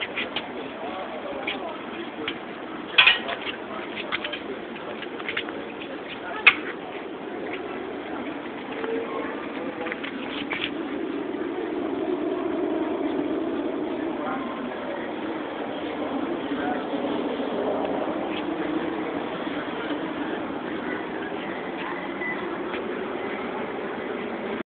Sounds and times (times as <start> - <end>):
Speech: 0.0 - 12.1, 12.8 - 24.6.